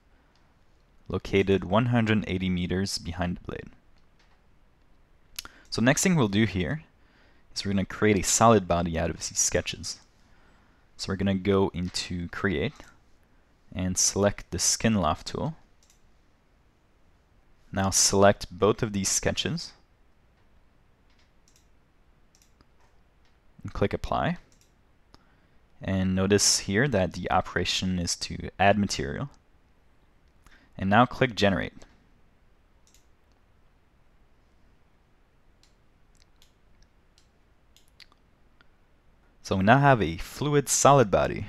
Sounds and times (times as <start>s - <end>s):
Speech: 1.1s - 3.8s, 5.7s - 6.9s, 7.6s - 10.1s, 11.0s - 13.0s, 13.7s - 15.6s, 17.7s - 19.8s, 23.6s - 24.5s, 25.8s - 29.4s, 30.8s - 31.9s, 39.4s - 41.4s.